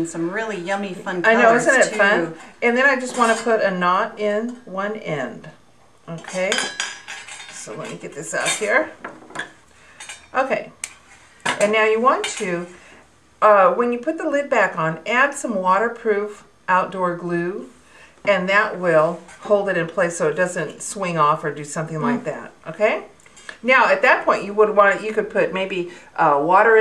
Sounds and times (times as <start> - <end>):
Speech: 0.0 - 5.5, 6.1 - 6.7, 7.6 - 9.0, 10.4 - 10.8, 11.6 - 12.7, 18.3 - 26.8.